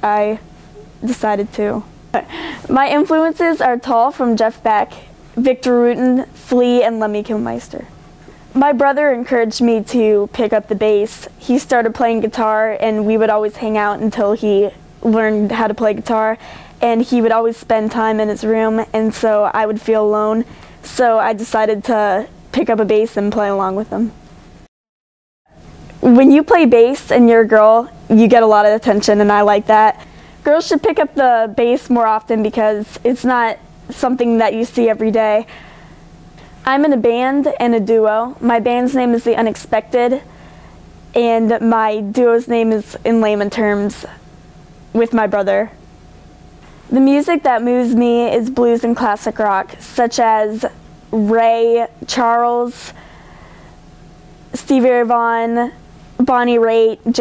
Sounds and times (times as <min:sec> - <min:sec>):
Speech: 0:00.0 - 0:00.4, 0:01.0 - 0:07.9, 0:08.6 - 0:24.2, 0:26.0 - 0:35.5, 0:36.6 - 0:40.3, 0:41.2 - 0:44.2, 0:45.0 - 0:45.8, 0:46.9 - 0:53.0, 0:54.6 - 0:57.2.